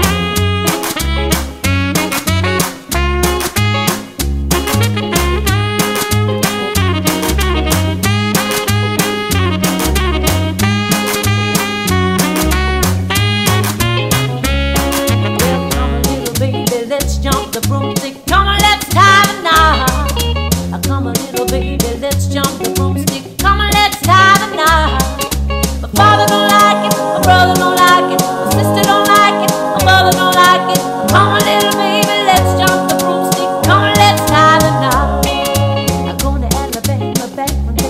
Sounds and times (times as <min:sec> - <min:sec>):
Music: 0:00.0 - 0:37.8.